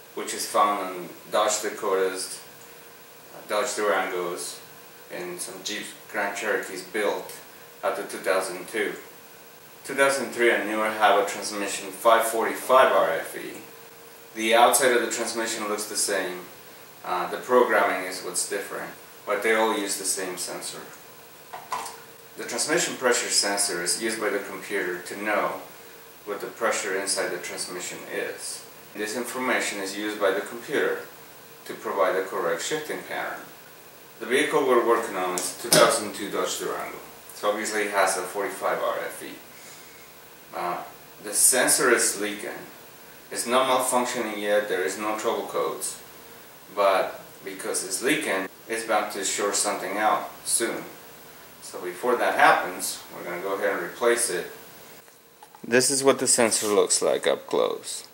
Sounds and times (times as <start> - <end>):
Speech: 0.0 - 2.5, 3.3 - 9.1, 9.8 - 13.7, 14.4 - 21.0, 22.4 - 25.7, 26.3 - 33.5, 34.2 - 39.5, 40.5 - 46.1, 46.7 - 51.0, 51.6 - 54.6, 55.6 - 58.1.